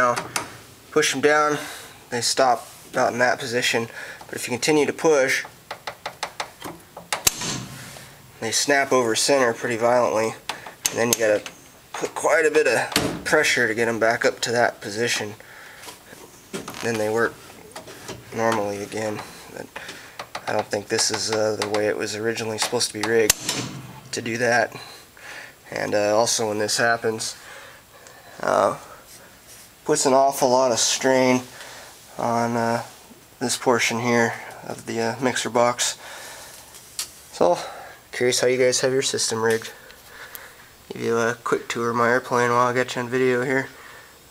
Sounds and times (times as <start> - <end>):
Speech: 0.0 - 0.2, 0.9 - 5.5, 8.4 - 15.4, 16.8 - 17.4, 18.3 - 19.8, 20.4 - 23.4, 24.1 - 25.0, 25.7 - 27.4, 28.4 - 29.0, 29.8 - 31.5, 32.1 - 36.0, 37.3 - 39.8, 40.9 - 43.8.